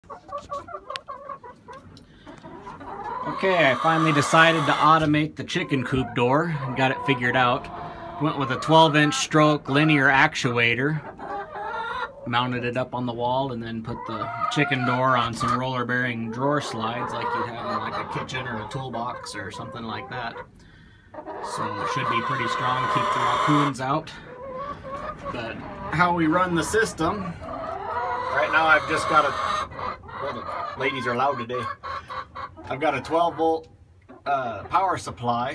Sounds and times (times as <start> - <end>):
Chicken, rooster: 0.0 - 10.0, 10.9 - 12.4, 13.8 - 20.5, 21.1 - 33.5
Speech: 3.3 - 7.6, 12.3 - 20.4, 21.5 - 24.2, 30.2 - 31.7, 32.7 - 33.7, 34.3 - 35.5.